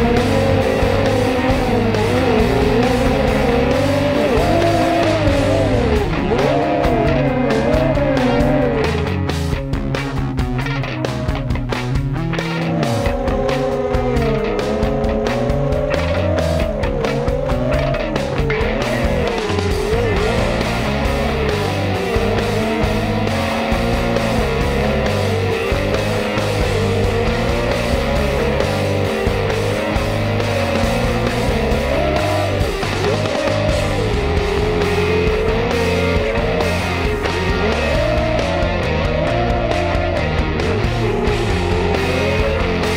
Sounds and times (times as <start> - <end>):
Music: 0.0 - 42.9.